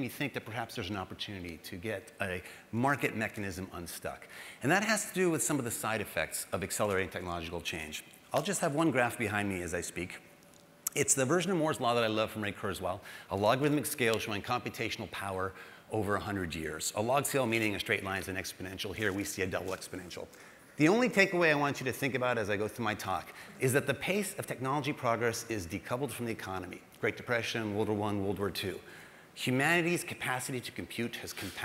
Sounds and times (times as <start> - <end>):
Speech: 0.0 - 10.2, 10.9 - 31.6.